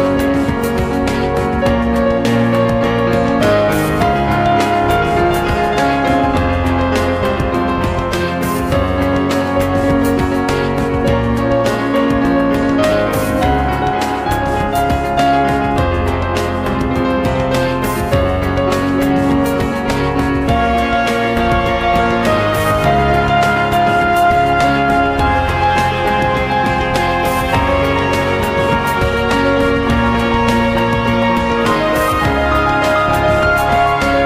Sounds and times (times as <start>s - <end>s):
Video game music: 0.0s - 34.2s.